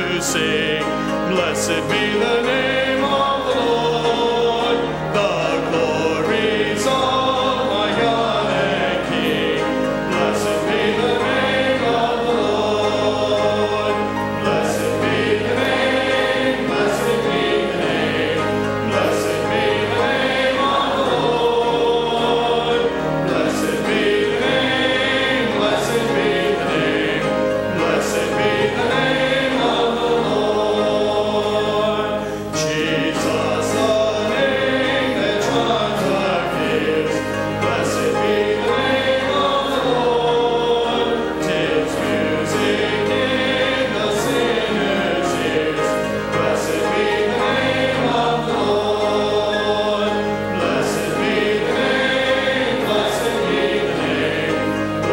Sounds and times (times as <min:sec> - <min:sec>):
Male singing: 0:00.0 - 0:09.6, 0:30.2 - 0:38.3
Choir: 0:00.0 - 0:55.1.